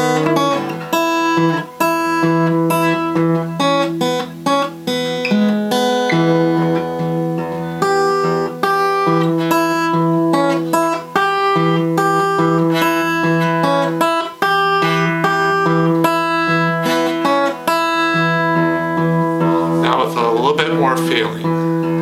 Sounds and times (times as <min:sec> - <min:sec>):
Guitar: 0:00.0 - 0:22.0.